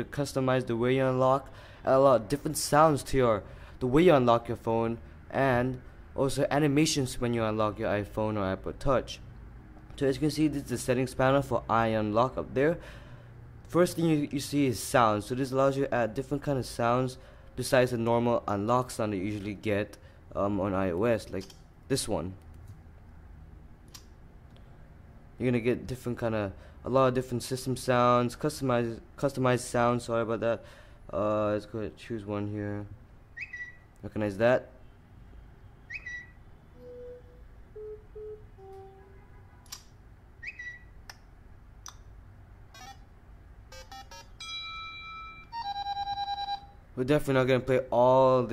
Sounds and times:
Speech: 0.0 - 9.2, 10.0 - 12.8, 13.7 - 22.4, 25.4 - 33.0, 34.0 - 34.8, 47.0 - 48.5.

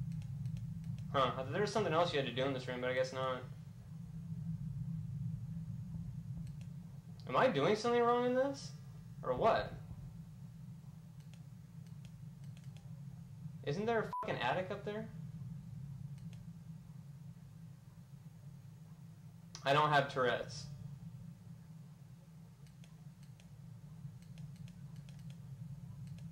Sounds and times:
Speech: 1.1 - 3.5, 7.2 - 9.8, 13.6 - 15.2, 19.6 - 20.8.

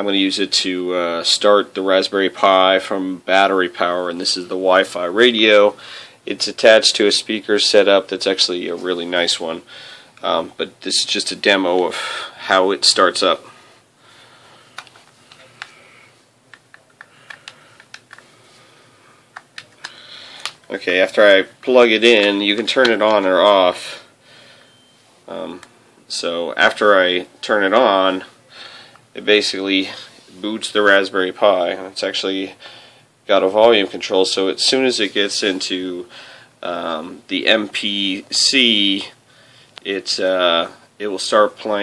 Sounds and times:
Speech: 0.0 - 9.6, 10.2 - 13.5, 20.7 - 24.0, 25.3 - 28.3, 29.2 - 32.6, 33.3 - 39.2, 39.8 - 41.8.

